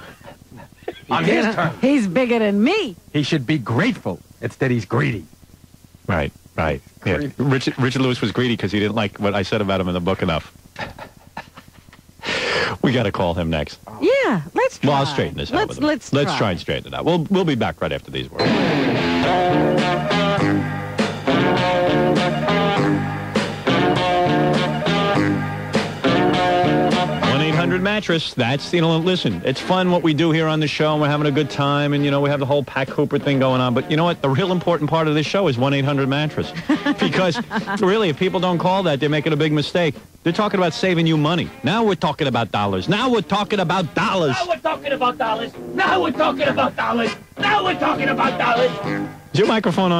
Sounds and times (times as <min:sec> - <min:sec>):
Speech: 0:06.1 - 0:10.5, 0:12.8 - 0:18.4, 0:27.3 - 0:48.8, 0:49.4 - 0:50.0.